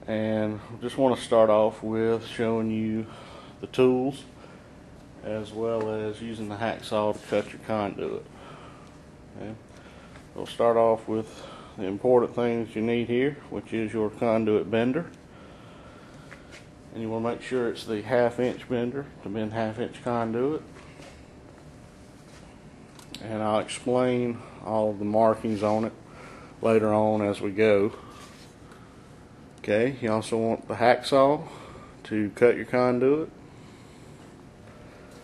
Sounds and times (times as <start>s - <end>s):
Speech: 0.0s - 4.3s, 5.2s - 8.3s, 9.4s - 9.6s, 10.4s - 15.2s, 16.9s - 20.7s, 23.2s - 26.0s, 26.6s - 28.0s, 29.6s - 33.3s.